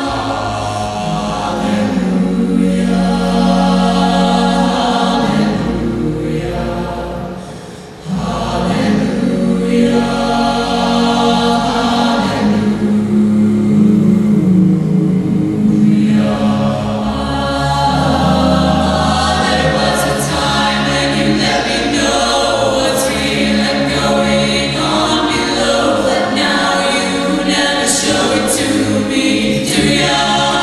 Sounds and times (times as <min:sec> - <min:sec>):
Vocal music: 0:00.0 - 0:30.6.